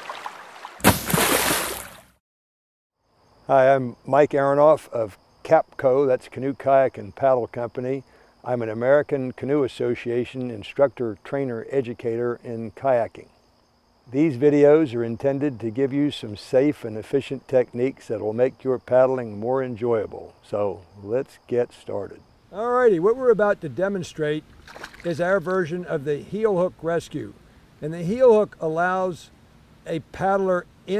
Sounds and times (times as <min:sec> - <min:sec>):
Speech: 0:03.5 - 0:13.3, 0:14.1 - 0:24.4, 0:25.0 - 0:29.3, 0:29.9 - 0:30.9.